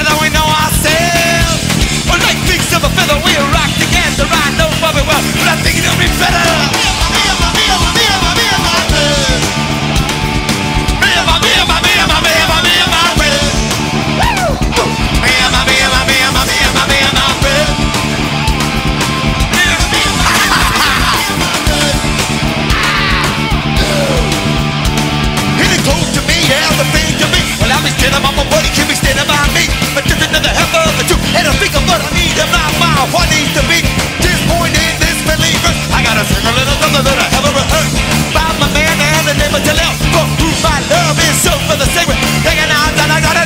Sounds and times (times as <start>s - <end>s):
Music: 0.0s - 43.4s.